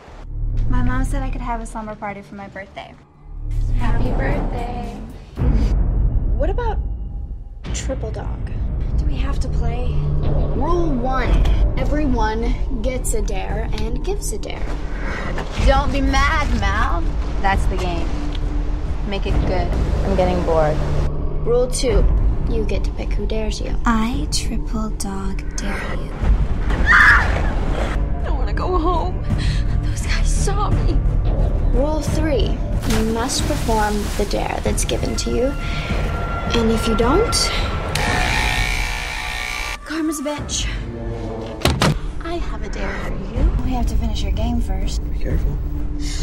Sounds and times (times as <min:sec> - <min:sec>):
Music: 0:00.2 - 0:46.2.